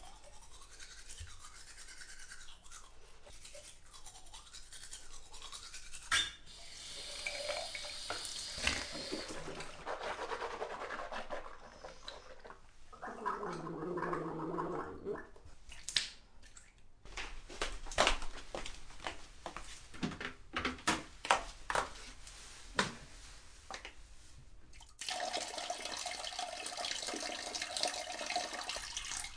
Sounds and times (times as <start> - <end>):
Toothbrush: 0.0 - 12.7.